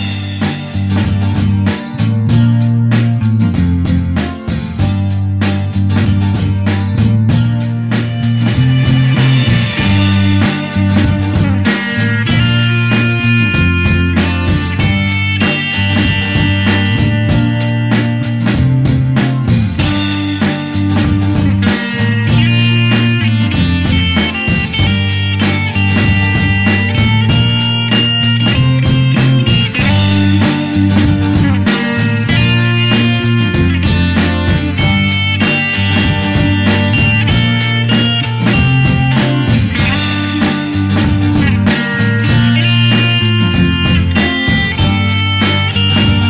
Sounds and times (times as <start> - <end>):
Music: 0.0 - 46.3.